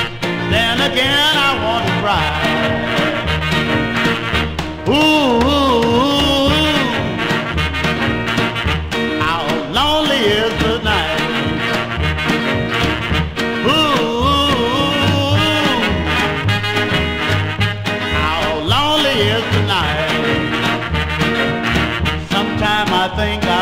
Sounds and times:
Guitar: 0:00.0 - 0:23.6.

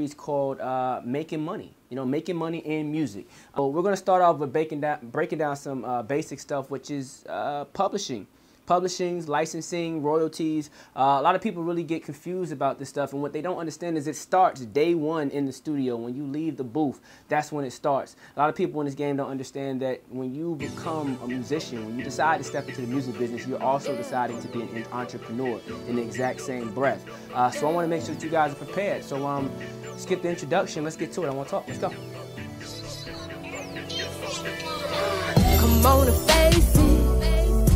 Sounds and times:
Speech: 0:00.0 - 0:32.1.

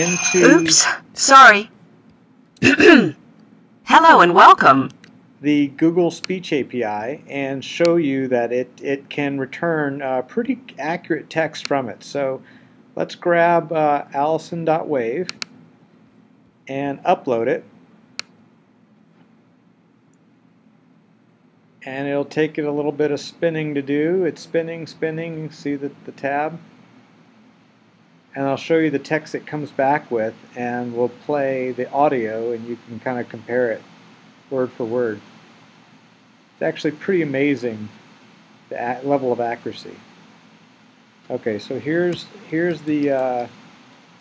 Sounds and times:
Narration, monologue: 0:00.0 - 0:44.2
Male speech, man speaking: 0:05.4 - 0:12.4, 0:13.0 - 0:15.3, 0:16.7 - 0:17.7, 0:21.8 - 0:26.6, 0:28.4 - 0:33.8, 0:34.5 - 0:35.2, 0:36.6 - 0:38.0, 0:38.7 - 0:40.0, 0:41.3 - 0:43.5.

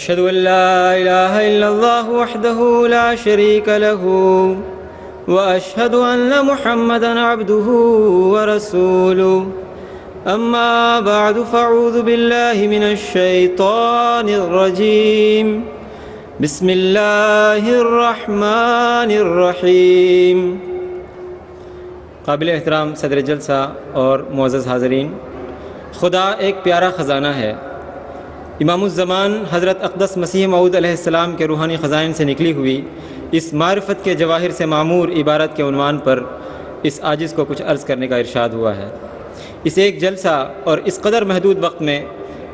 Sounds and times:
Male speech, man speaking: 0:22.3 - 0:25.2, 0:26.0 - 0:27.6, 0:28.6 - 0:32.8, 0:33.4 - 0:36.3, 0:36.9 - 0:39.0, 0:39.7 - 0:42.1.

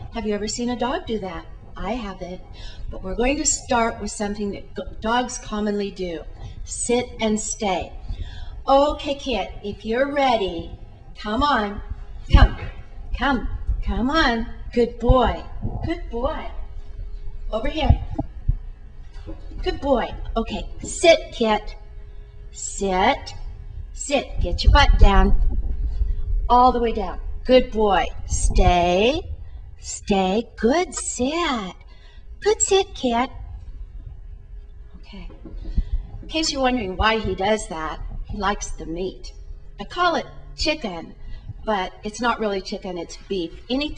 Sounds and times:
Speech: 0:00.1 - 0:02.4, 0:03.0 - 0:08.0, 0:08.7 - 0:16.6, 0:17.5 - 0:18.2, 0:19.6 - 0:21.8, 0:22.6 - 0:23.4, 0:24.0 - 0:25.4, 0:26.5 - 0:31.8, 0:32.4 - 0:33.3, 0:35.0 - 0:35.4, 0:36.3 - 0:43.9.

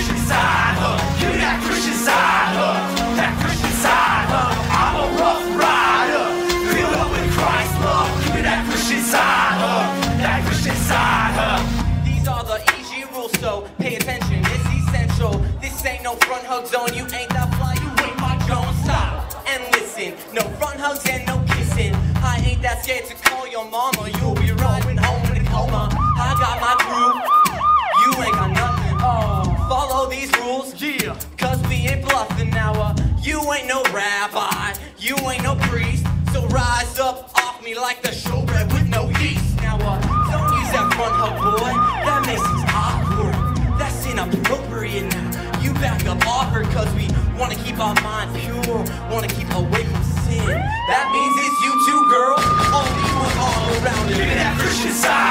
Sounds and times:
Gospel music: 0:00.0 - 0:55.3.

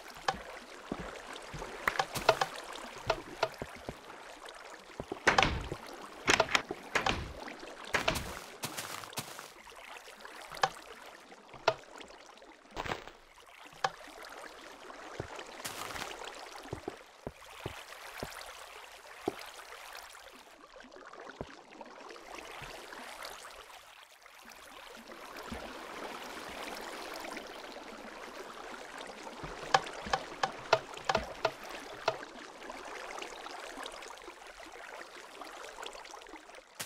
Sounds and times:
Boat, Water vehicle: 0:00.0 - 0:36.8.

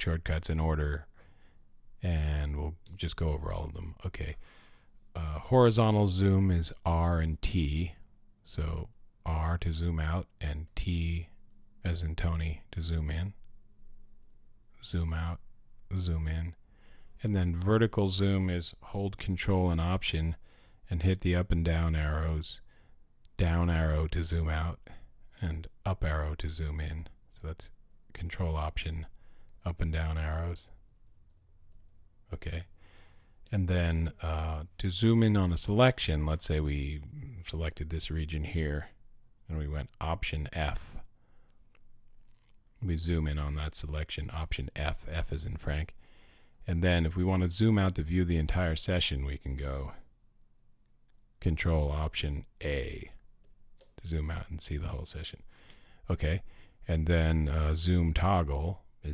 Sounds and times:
Speech: 0:00.0 - 0:01.2, 0:02.0 - 0:04.4, 0:05.2 - 0:13.5, 0:14.8 - 0:16.6, 0:17.2 - 0:22.7, 0:23.3 - 0:30.8, 0:32.3 - 0:32.7, 0:33.5 - 0:41.1, 0:42.8 - 0:46.0, 0:46.6 - 0:50.1, 0:51.4 - 0:53.2, 0:54.0 - 0:55.4, 0:56.1 - 0:59.1.

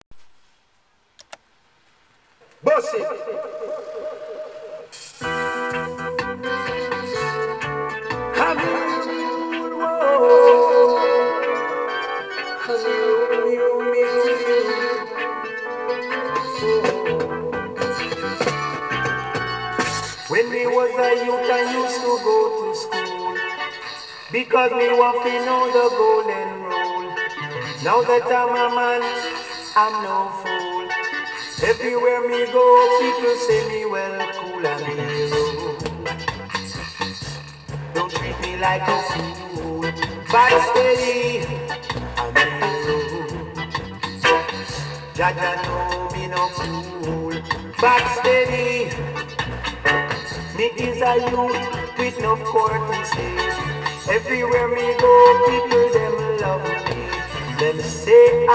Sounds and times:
Music: 0:02.9 - 0:58.5.

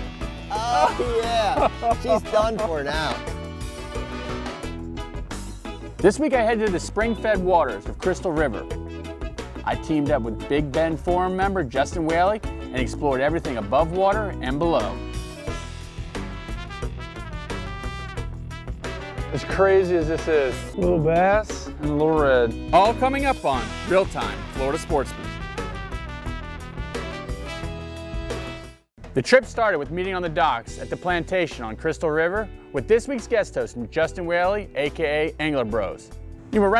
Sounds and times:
Music: 0:00.0 - 0:36.7
Speech: 0:00.5 - 0:03.2, 0:06.0 - 0:08.7, 0:09.7 - 0:15.0, 0:19.3 - 0:25.2, 0:29.2 - 0:36.7.

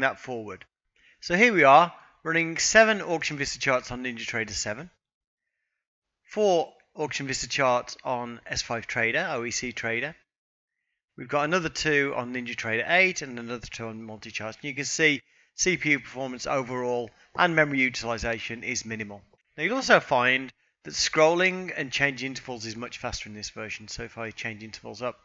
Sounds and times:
Speech: 0:00.0 - 0:00.6, 0:01.2 - 0:05.0, 0:06.3 - 0:10.2, 0:11.2 - 0:25.2.

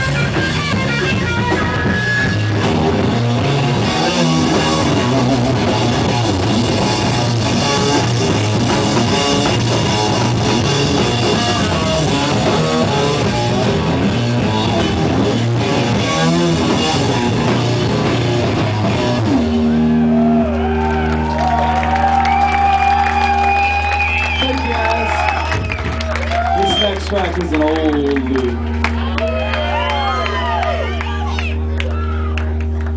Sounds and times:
Speech: 0:26.6 - 0:28.6.

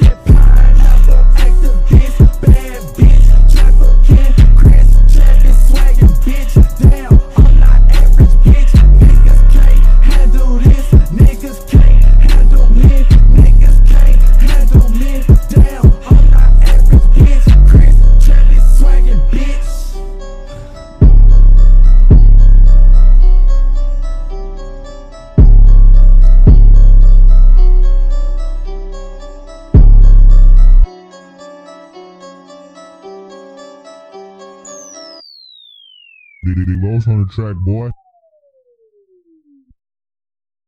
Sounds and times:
Music: 0:00.0 - 0:39.7
Speech: 0:36.5 - 0:38.0.

